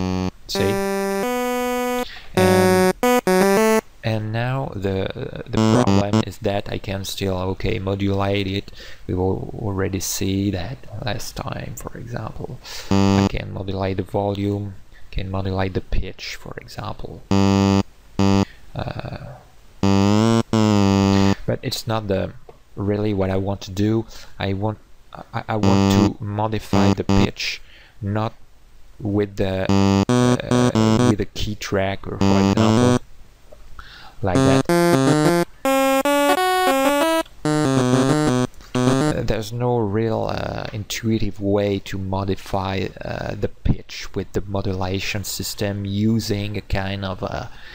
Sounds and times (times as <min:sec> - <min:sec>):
Musical instrument: 0:00.0 - 0:03.8, 0:05.6 - 0:06.2, 0:19.8 - 0:21.3, 0:29.7 - 0:31.2, 0:32.2 - 0:33.0, 0:34.4 - 0:39.2
Inside, small room: 0:00.0 - 0:47.7
Speech: 0:00.5 - 0:00.8, 0:04.0 - 0:17.3, 0:18.7 - 0:19.5, 0:21.2 - 0:28.4, 0:29.0 - 0:29.7, 0:30.4 - 0:33.0, 0:34.2 - 0:34.7, 0:39.1 - 0:47.6.